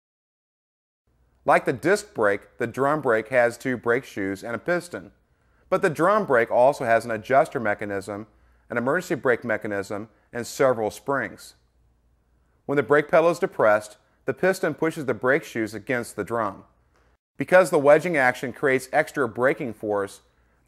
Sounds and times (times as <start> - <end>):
Speech: 1.5 - 11.6, 12.7 - 16.7, 17.4 - 20.3.